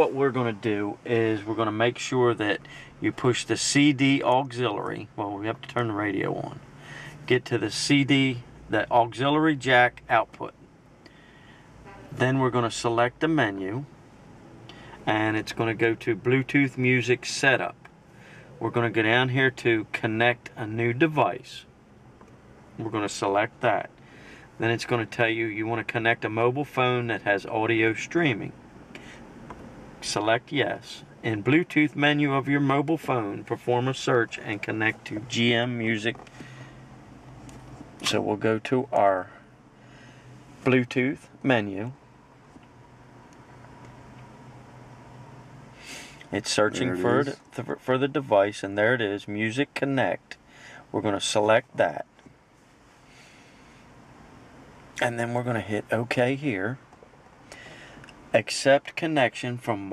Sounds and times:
Speech: 0.0s - 6.6s, 7.3s - 10.6s, 12.1s - 13.9s, 15.0s - 17.8s, 18.6s - 21.7s, 22.8s - 23.9s, 24.6s - 28.6s, 30.0s - 36.2s, 38.0s - 39.4s, 40.6s - 42.0s, 46.3s - 52.1s, 55.0s - 56.8s, 58.3s - 59.9s.

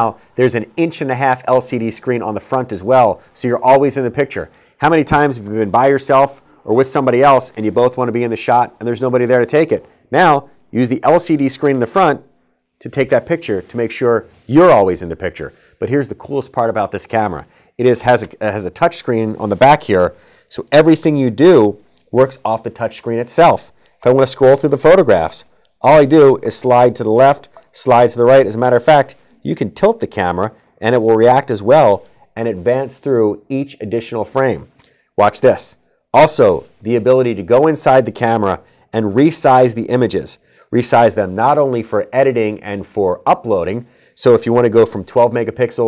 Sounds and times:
Speech: 0.0s - 45.8s.

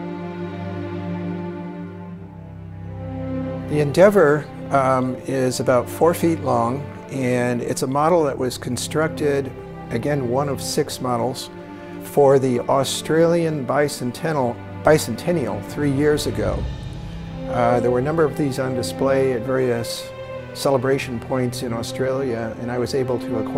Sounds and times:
Music: 0.0s - 23.5s
Speech: 3.7s - 11.5s, 12.1s - 16.7s, 17.5s - 23.5s.

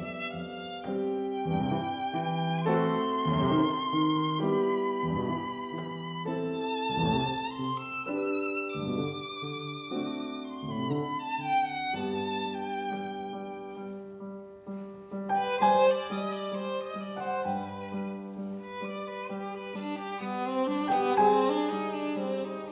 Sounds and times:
Violin, fiddle: 0.0s - 22.7s.

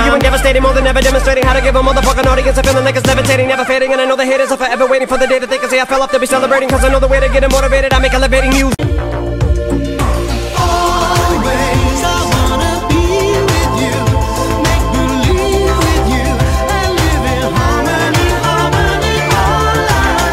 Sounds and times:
Music: 0.0s - 20.3s.

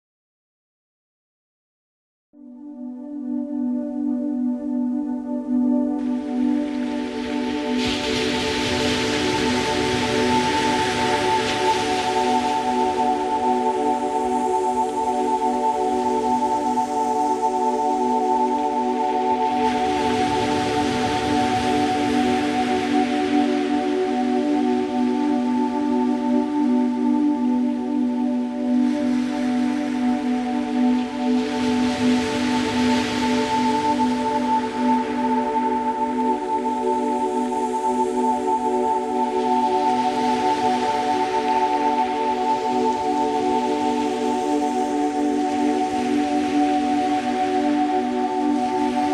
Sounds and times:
Music: 2.3s - 49.1s.

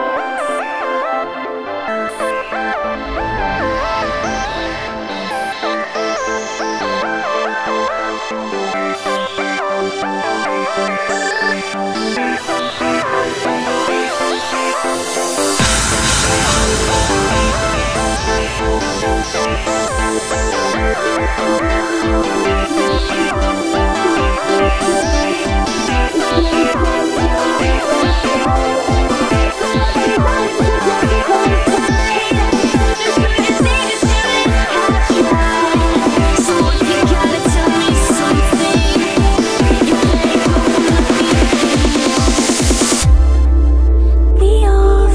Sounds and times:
Music: 0.0s - 45.1s.

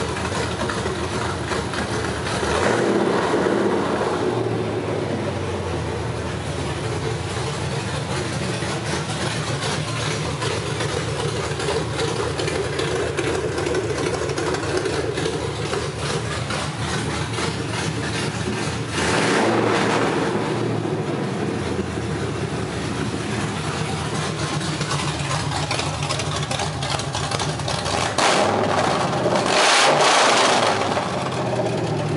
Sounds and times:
Idling: 0.0s - 29.5s, 30.5s - 32.1s
Vehicle: 0.0s - 32.1s.

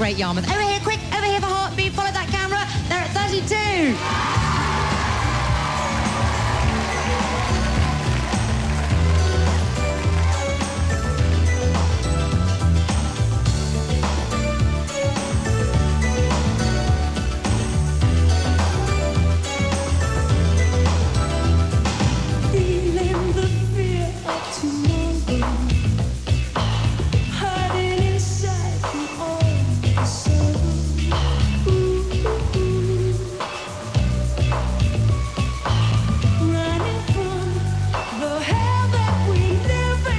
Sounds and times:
Music: 0.0s - 40.1s.

